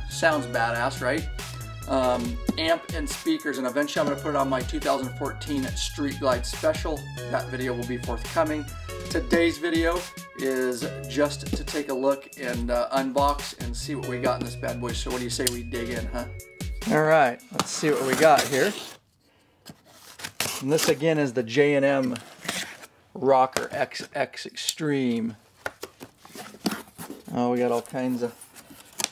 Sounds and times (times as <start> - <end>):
Music: 0.0 - 18.8
Speech: 1.9 - 16.3, 20.6 - 22.2, 23.2 - 25.4, 27.3 - 28.4.